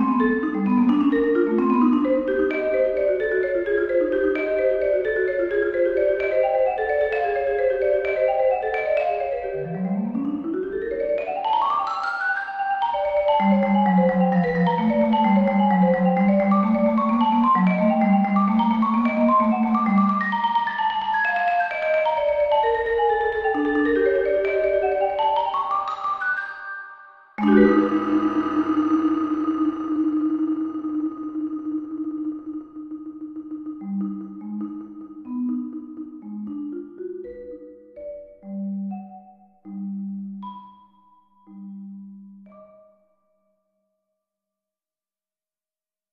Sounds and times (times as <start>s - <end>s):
Piano: 0.0s - 43.0s
Marimba, xylophone: 0.0s - 44.0s.